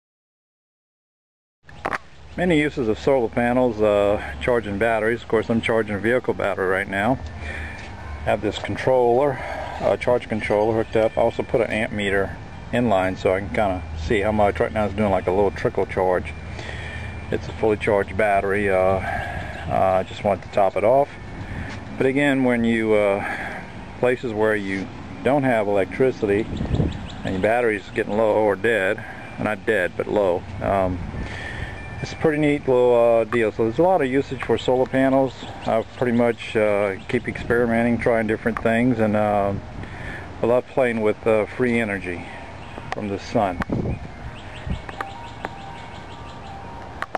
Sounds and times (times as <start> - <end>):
Speech: 2.4 - 7.2, 8.3 - 16.4, 17.3 - 19.1, 19.7 - 21.2, 22.0 - 23.4, 24.0 - 26.5, 27.3 - 31.0, 32.0 - 39.6, 40.4 - 42.4, 43.0 - 43.6.